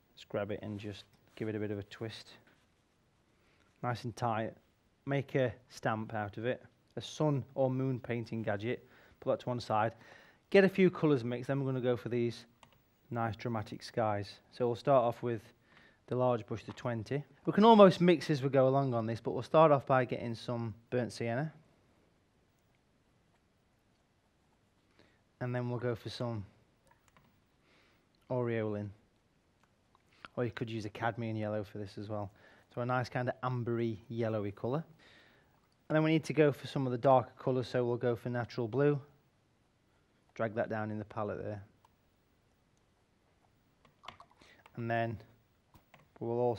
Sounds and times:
Speech: 0.2 - 2.5, 3.8 - 12.5, 13.1 - 21.6, 25.4 - 26.6, 28.3 - 29.0, 30.3 - 35.0, 35.9 - 39.2, 40.4 - 41.7, 44.8 - 45.3, 46.2 - 46.5.

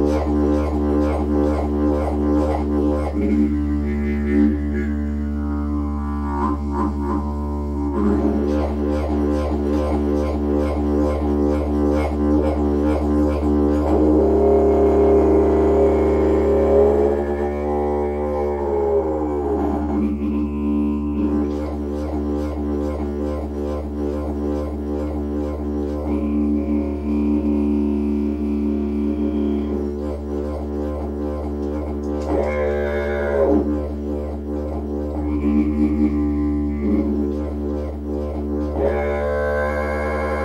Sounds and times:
Didgeridoo: 0.0 - 40.4.

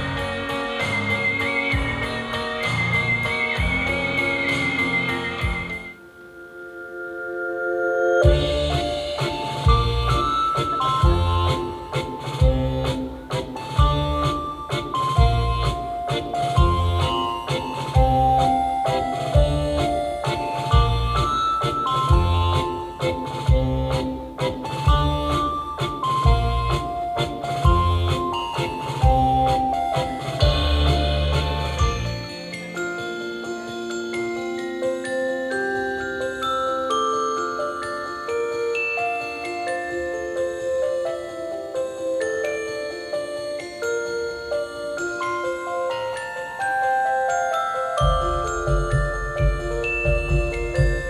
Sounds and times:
Glockenspiel: 0.0 - 51.1
Marimba, xylophone: 0.0 - 51.1
Wind chime: 0.0 - 51.1.

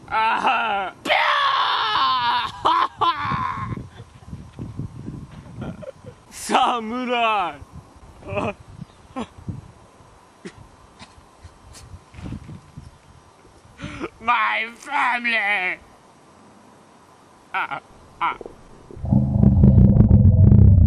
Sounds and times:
Speech: 6.4 - 7.6, 14.2 - 15.8.

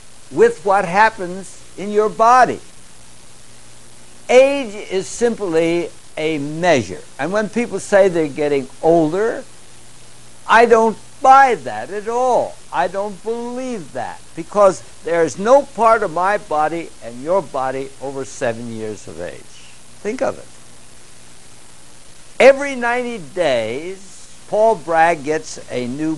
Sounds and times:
Speech: 0.4 - 2.6, 4.3 - 9.5, 10.5 - 20.5, 22.4 - 26.1.

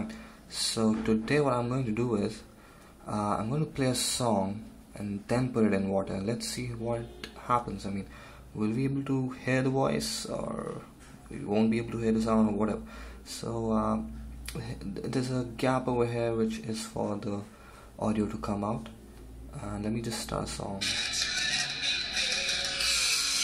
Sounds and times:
Speech: 0.0 - 2.5, 3.1 - 22.0.

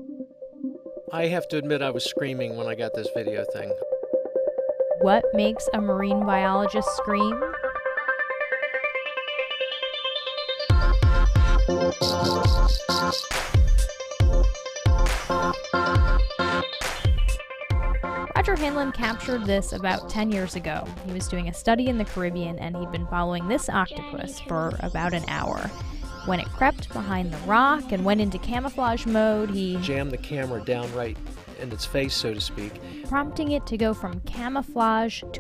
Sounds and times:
Music: 0.0 - 35.4
Speech: 1.1 - 3.8, 5.0 - 7.4, 18.4 - 25.7, 26.3 - 35.4.

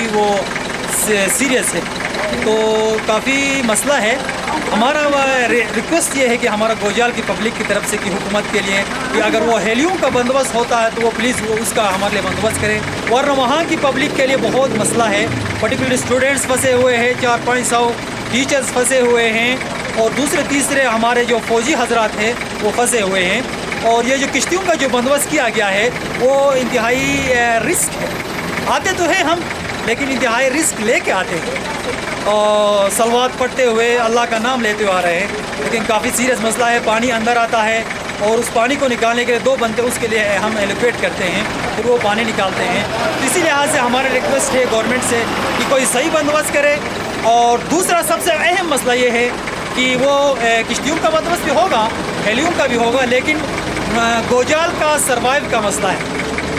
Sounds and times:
Speech: 0.0 - 56.0.

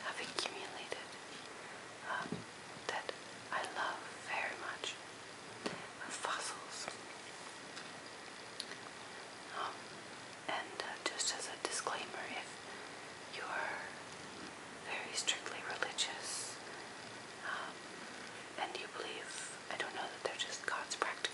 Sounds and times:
Whispering: 0.0 - 1.2, 2.0 - 5.0, 5.9 - 7.0, 9.5 - 9.9, 10.5 - 12.6, 13.3 - 14.0, 14.8 - 16.6, 17.4 - 17.8, 18.6 - 21.3.

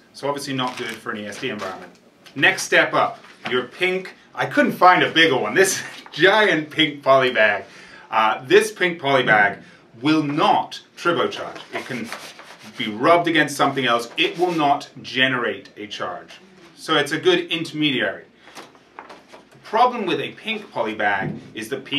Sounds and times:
Speech: 0.2 - 18.3, 19.6 - 21.9.

